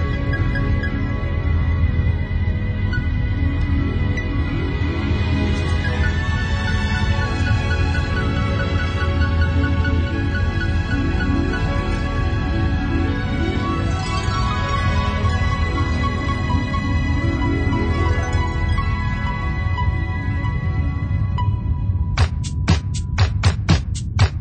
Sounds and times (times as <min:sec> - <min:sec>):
House music: 0:22.2 - 0:24.4.